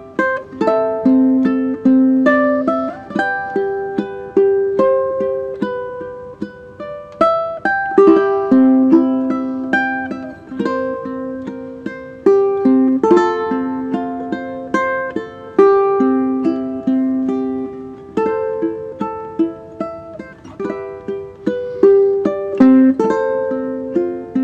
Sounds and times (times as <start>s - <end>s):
Ukulele: 0.0s - 24.4s.